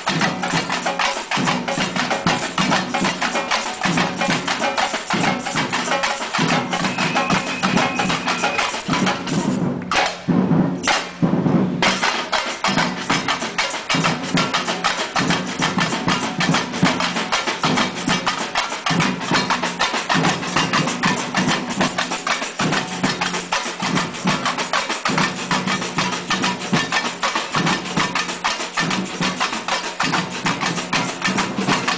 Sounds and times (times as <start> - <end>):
Music: 0.0 - 31.9.